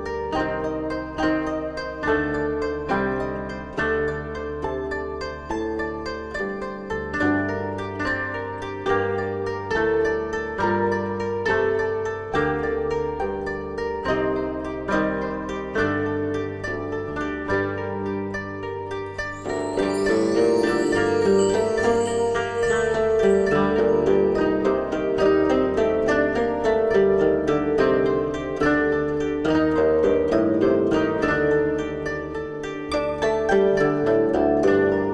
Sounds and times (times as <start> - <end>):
Harp: 0.0 - 35.1.